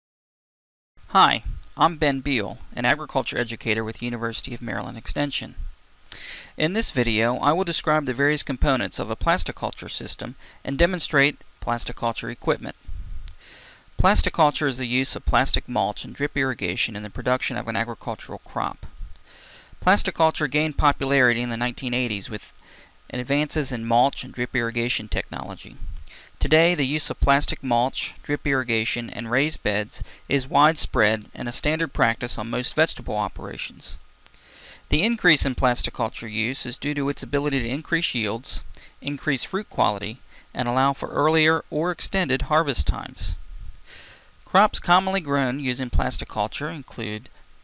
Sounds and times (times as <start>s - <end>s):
Speech: 1.1s - 5.6s, 6.6s - 12.8s, 14.0s - 18.9s, 19.8s - 25.8s, 26.4s - 34.0s, 34.9s - 43.4s, 44.5s - 47.3s.